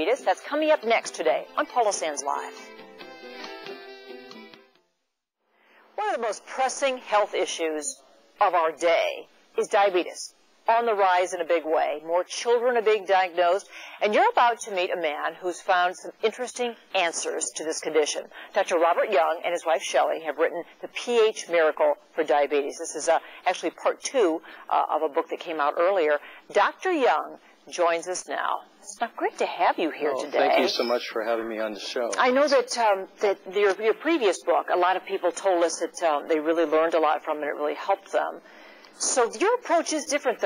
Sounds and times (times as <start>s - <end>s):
Speech: 6.0s - 38.4s, 39.0s - 40.4s.